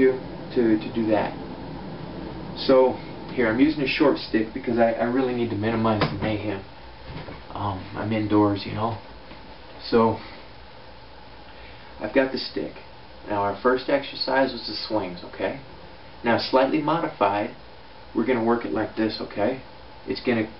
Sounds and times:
Speech: 0.0 - 1.4, 2.6 - 6.7, 7.5 - 9.0, 9.8 - 10.3, 12.0 - 17.6, 18.2 - 20.5
Inside, small room: 0.0 - 20.5.

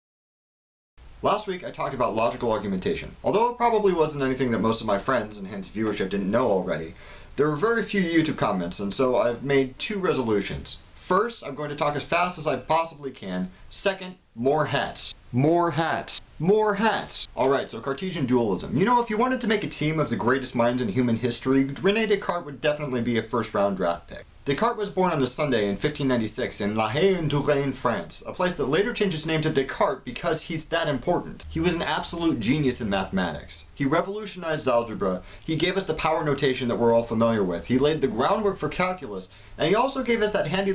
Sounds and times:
Speech: 1.2 - 40.7.

